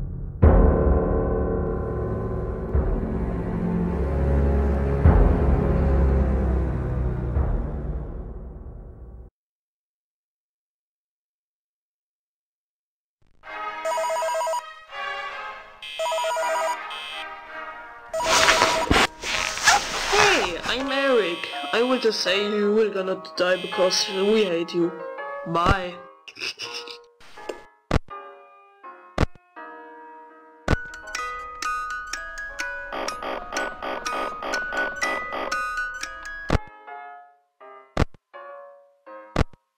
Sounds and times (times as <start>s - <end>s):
Music: 0.0s - 9.3s, 13.4s - 39.7s
Speech: 20.1s - 26.0s.